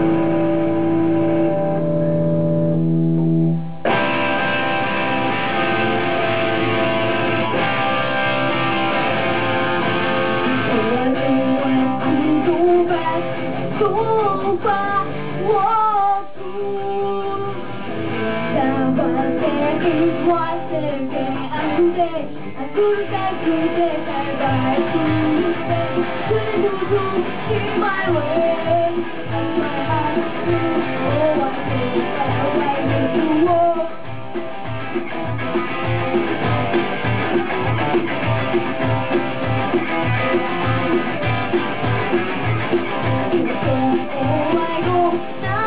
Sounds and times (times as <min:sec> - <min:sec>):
Music: 0:00.0 - 0:45.6.